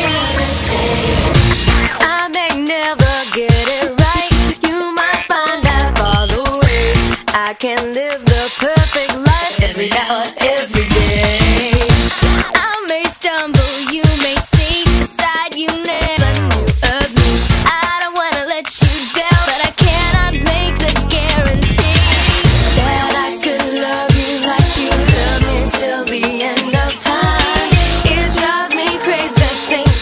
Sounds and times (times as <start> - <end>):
Music: 0.0 - 30.0.